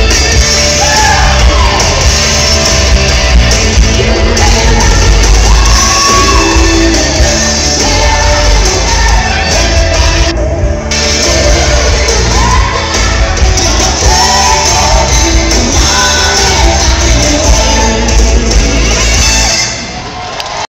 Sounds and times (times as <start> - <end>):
Electric guitar: 0.0 - 19.9.